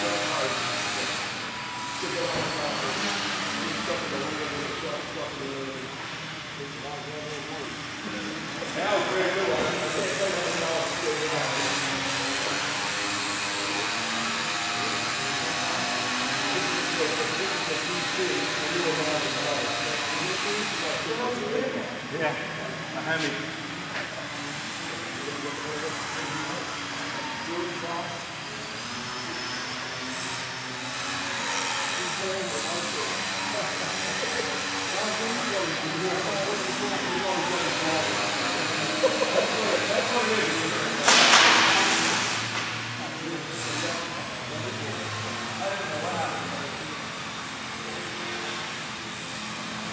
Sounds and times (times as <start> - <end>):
Speech: 0.0 - 1.2, 2.0 - 12.8, 16.5 - 28.8, 32.0 - 41.9, 43.0 - 48.2
Inside, large room or hall: 0.0 - 49.9.